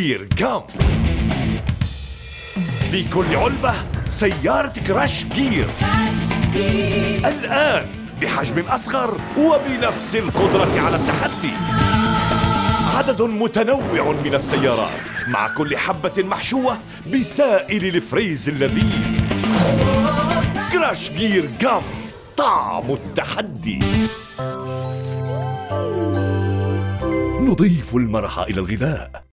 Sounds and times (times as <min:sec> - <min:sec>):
Speech: 0:00.0 - 0:00.7, 0:02.8 - 0:05.7, 0:07.2 - 0:11.6, 0:12.9 - 0:19.0, 0:20.7 - 0:24.0, 0:27.4 - 0:29.3
Music: 0:00.0 - 0:29.3.